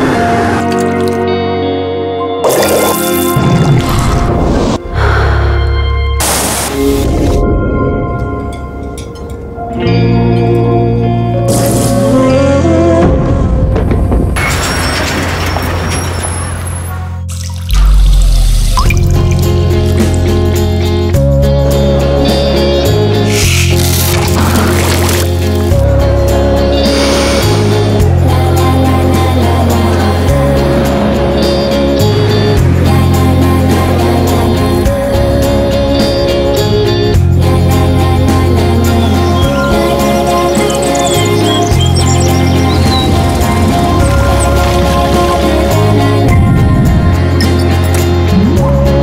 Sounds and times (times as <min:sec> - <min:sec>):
Music: 0:00.0 - 0:49.0.